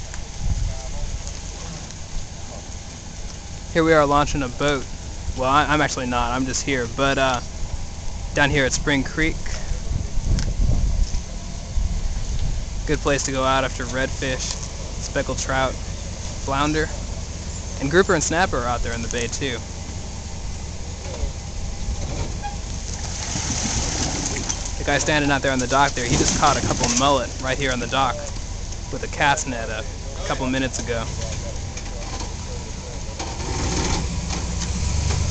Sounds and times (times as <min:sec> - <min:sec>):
Speech: 0:03.7 - 0:07.5, 0:08.4 - 0:10.0, 0:12.8 - 0:15.8, 0:16.4 - 0:17.0, 0:17.8 - 0:19.7, 0:24.8 - 0:33.2.